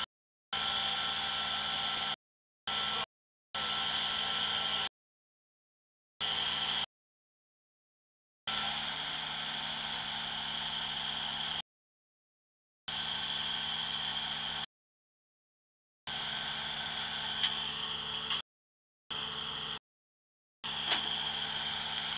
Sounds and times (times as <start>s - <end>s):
Vehicle: 0.0s - 4.9s, 6.2s - 6.9s, 8.5s - 11.7s, 12.9s - 14.7s, 16.1s - 18.5s, 19.1s - 19.8s, 20.6s - 22.1s.